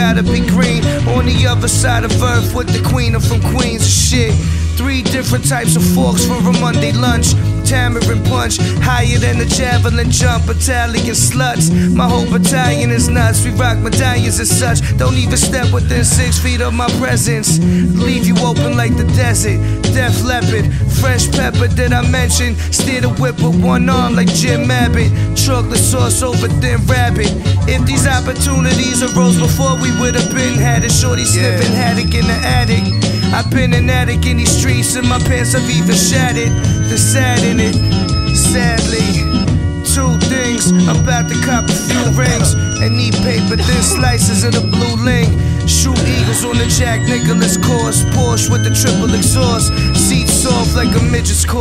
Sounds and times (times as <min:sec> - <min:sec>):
Music: 0:00.0 - 0:51.6.